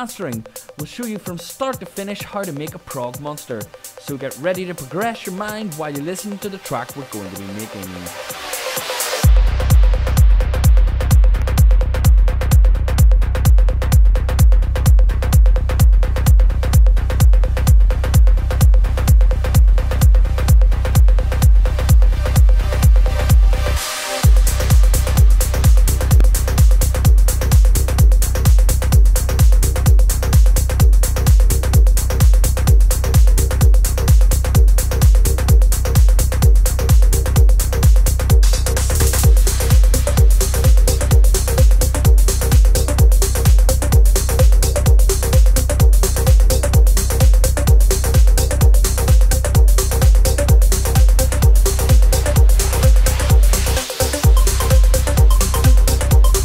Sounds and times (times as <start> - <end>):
Speech: 0.0 - 8.2
Music: 0.0 - 56.4.